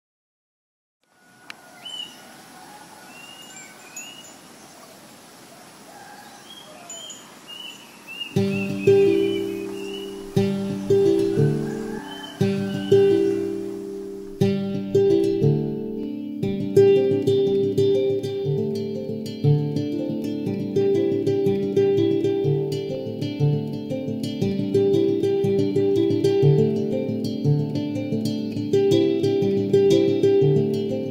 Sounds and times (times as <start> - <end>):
Outside, rural or natural: 1.0 - 31.1
Bird: 1.1 - 14.3
Music: 8.3 - 31.1.